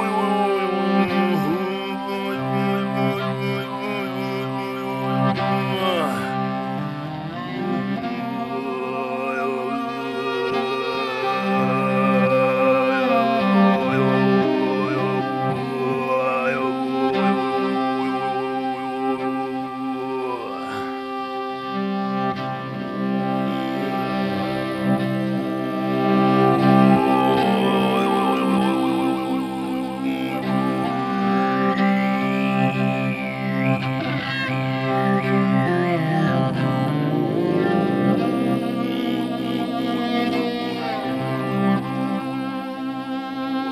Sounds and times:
Violin, fiddle: 0:00.0 - 0:43.7.

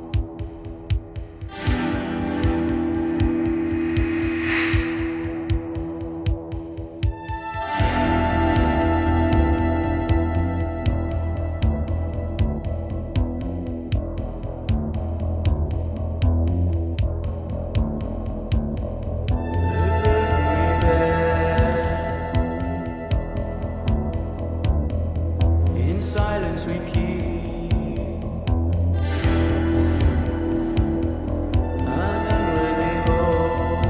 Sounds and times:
Scary music: 0:00.0 - 0:33.8.

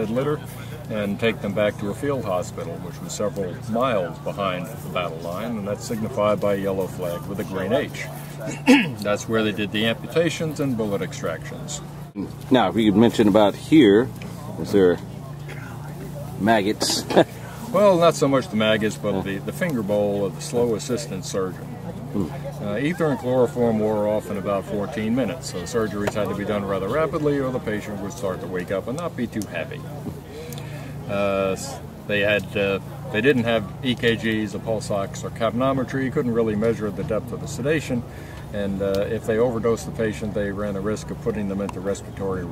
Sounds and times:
Speech: 0:00.0 - 0:30.2, 0:31.0 - 0:42.5.

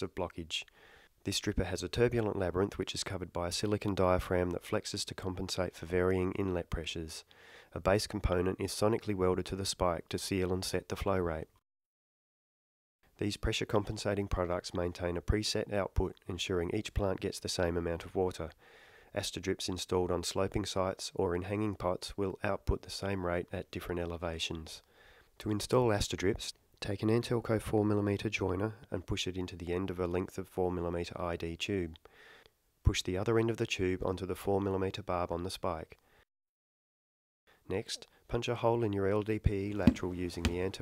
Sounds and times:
Speech: 0:00.0 - 0:11.6, 0:13.2 - 0:24.8, 0:25.4 - 0:32.0, 0:32.8 - 0:36.0, 0:37.7 - 0:40.8.

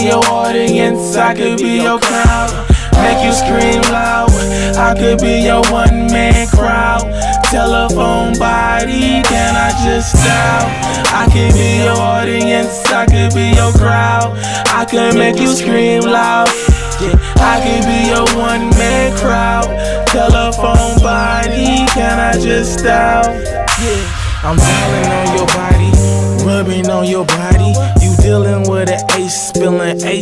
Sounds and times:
Music: 0:00.0 - 0:30.2.

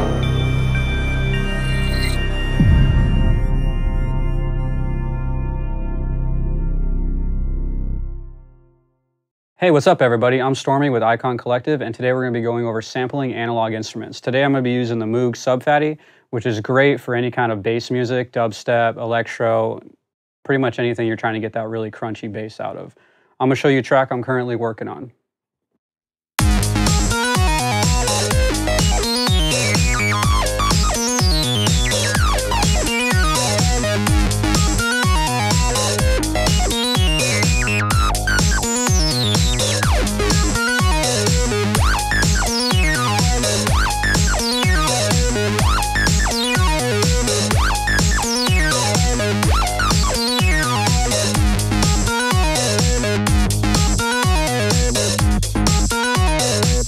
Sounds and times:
Music: 0:00.0 - 0:09.2, 0:26.4 - 0:56.8
Speech: 0:09.6 - 0:25.2.

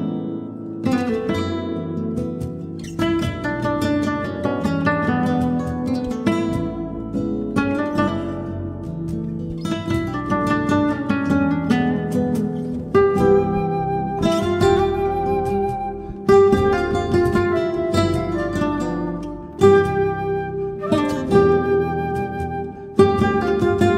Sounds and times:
Acoustic guitar: 0:00.0 - 0:23.9
Music of Latin America: 0:00.0 - 0:23.9.

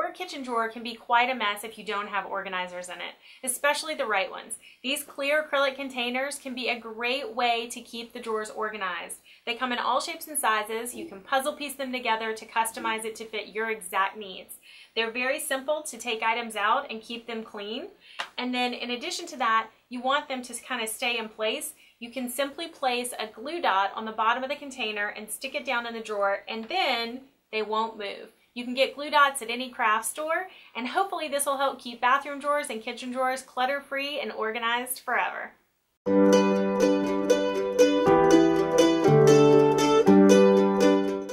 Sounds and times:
Speech: 0:00.0 - 0:35.6.

